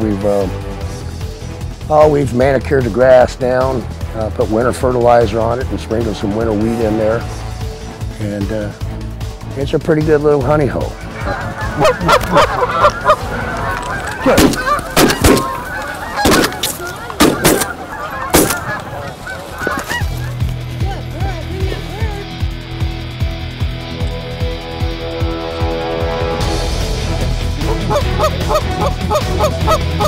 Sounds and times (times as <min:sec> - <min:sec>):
Music: 0:00.0 - 0:30.0
Goose: 0:11.2 - 0:20.4, 0:27.7 - 0:30.0.